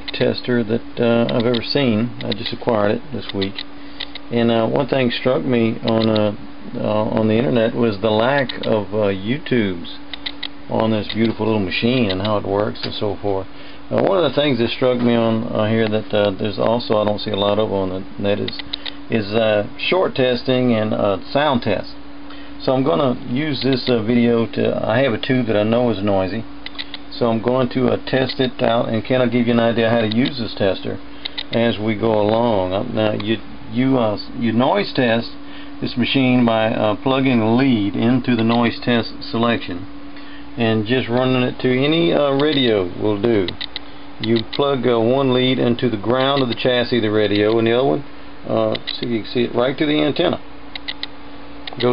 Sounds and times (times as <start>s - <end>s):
Speech: 0.1s - 3.6s, 4.3s - 10.0s, 10.7s - 22.0s, 22.6s - 26.5s, 27.1s - 39.9s, 40.6s - 43.6s, 44.2s - 50.4s.